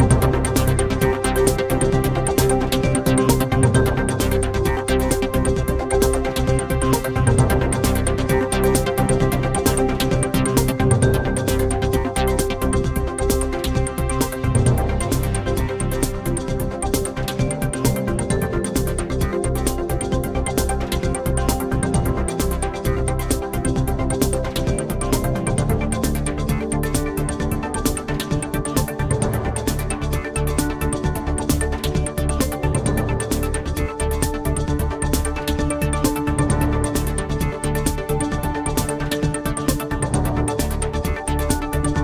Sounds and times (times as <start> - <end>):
Music: 0.0 - 42.0.